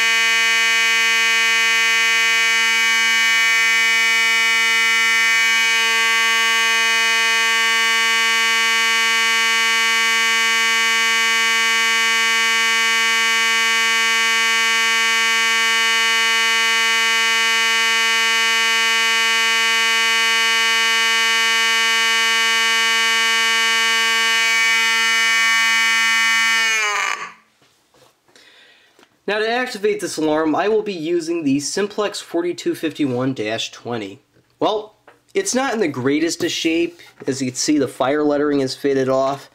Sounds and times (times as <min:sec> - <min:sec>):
Fire alarm: 0:00.0 - 0:27.4.